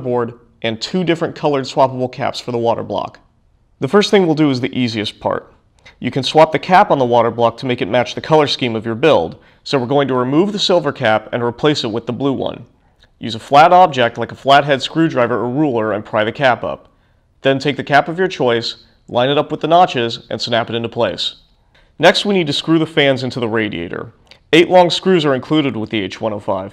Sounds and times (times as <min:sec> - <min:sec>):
Speech: 0:00.0 - 0:21.4, 0:22.0 - 0:26.7.